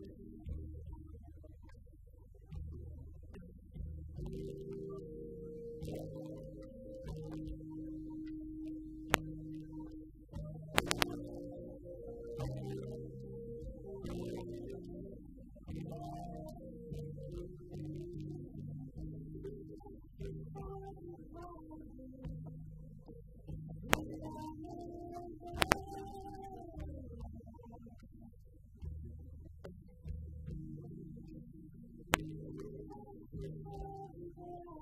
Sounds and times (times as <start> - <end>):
Music: 0.0 - 34.8.